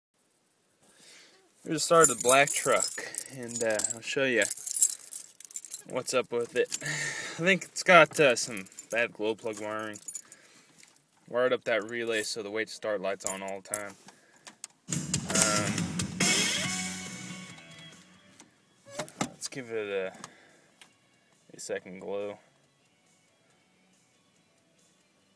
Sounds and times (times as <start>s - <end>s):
Speech: 1.6s - 4.5s, 5.8s - 6.8s, 7.4s - 10.0s, 11.3s - 14.0s, 19.4s - 20.2s, 21.5s - 22.4s
Keys jangling: 1.9s - 7.1s, 8.2s - 11.0s, 13.2s - 13.9s.